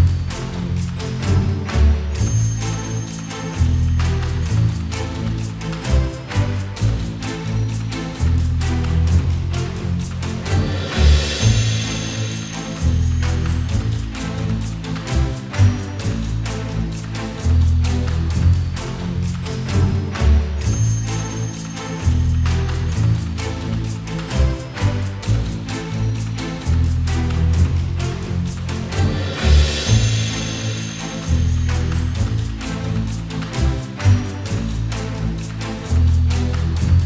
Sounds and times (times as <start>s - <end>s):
Video game music: 0.0s - 37.0s.